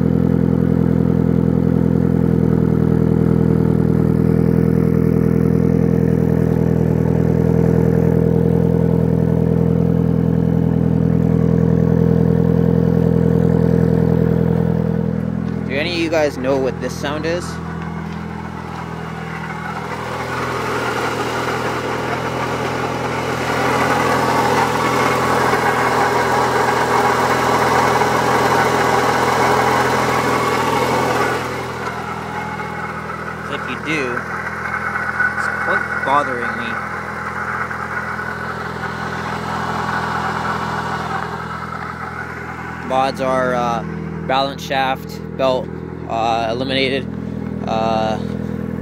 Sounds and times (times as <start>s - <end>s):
Speech: 15.7s - 17.6s, 33.5s - 34.2s, 35.4s - 36.8s, 42.8s - 48.3s.